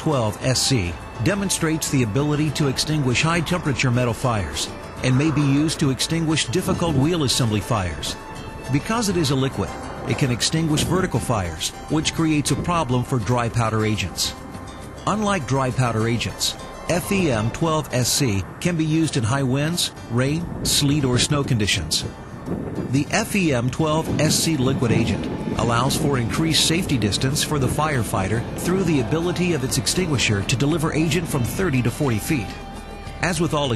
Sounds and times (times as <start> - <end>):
Speech: 0.0 - 14.4, 15.0 - 22.1, 22.9 - 32.6, 33.2 - 33.7
Music: 0.0 - 33.7.